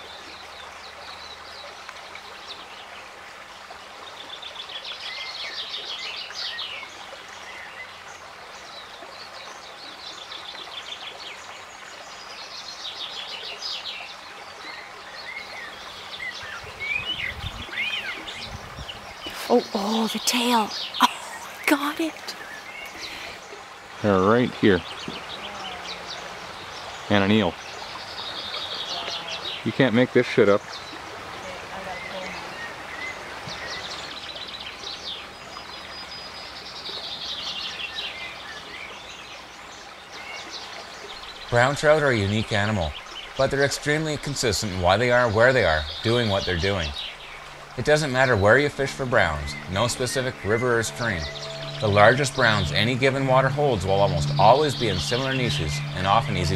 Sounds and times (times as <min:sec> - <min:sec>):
Bird vocalization, bird call, bird song: 0:00.0 - 0:21.7, 0:22.3 - 0:23.6, 0:24.3 - 0:56.5
Outside, rural or natural: 0:00.0 - 0:56.5
Speech: 0:19.4 - 0:22.4, 0:41.5 - 0:47.0, 0:47.8 - 0:56.5.